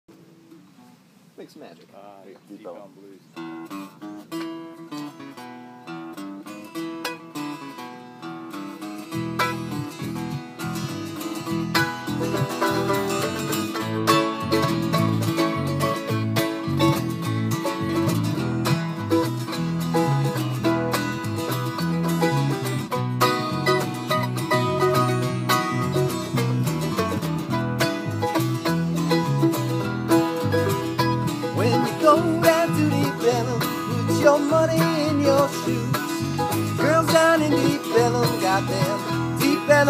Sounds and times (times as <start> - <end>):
Mandolin: 2.6 - 39.8.